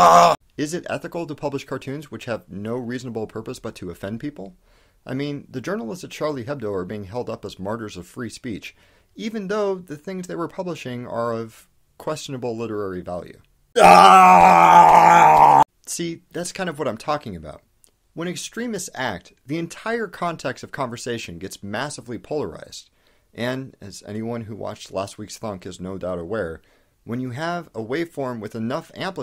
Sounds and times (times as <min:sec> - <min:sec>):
Speech: 0:00.0 - 0:13.5, 0:15.8 - 0:29.2.